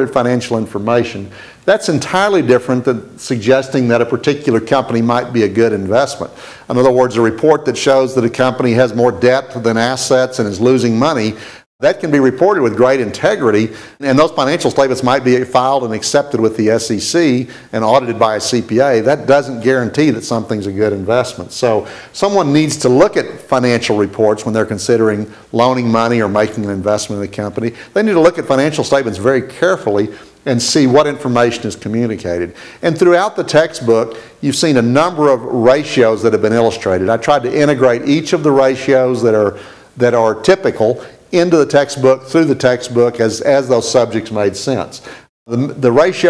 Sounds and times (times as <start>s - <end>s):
Speech: 0.0s - 46.2s.